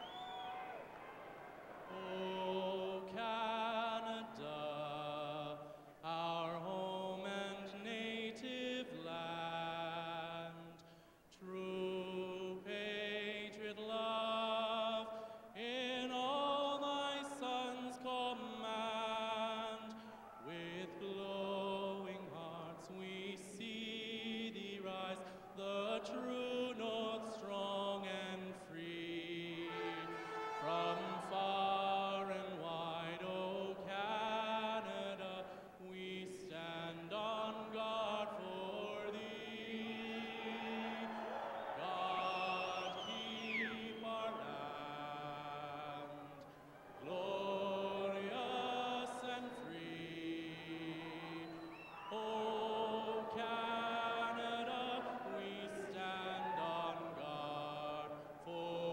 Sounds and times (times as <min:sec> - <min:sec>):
Male singing: 0:01.9 - 0:41.2, 0:41.8 - 0:46.4, 0:47.0 - 0:58.9
Music: 0:29.5 - 0:31.6.